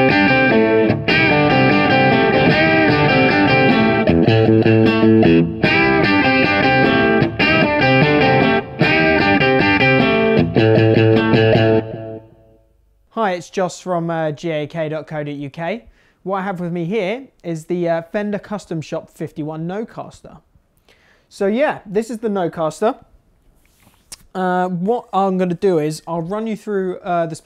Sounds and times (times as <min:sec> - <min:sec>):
Speech: 0:13.1 - 0:20.5, 0:21.3 - 0:23.1, 0:24.3 - 0:27.4.